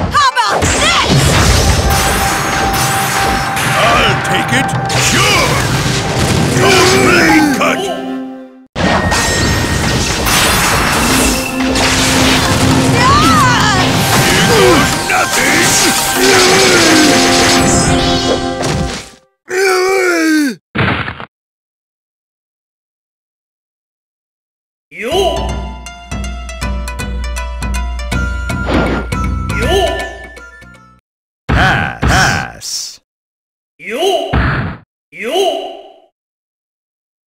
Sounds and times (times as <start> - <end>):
Music: 1.7 - 8.7, 11.2 - 19.4, 25.1 - 31.0.